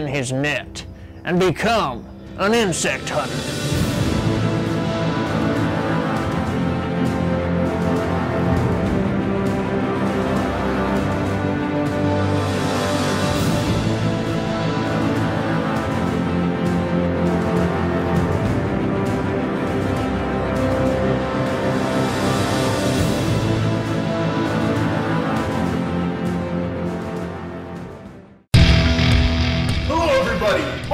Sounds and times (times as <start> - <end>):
Music: 0.0 - 30.9.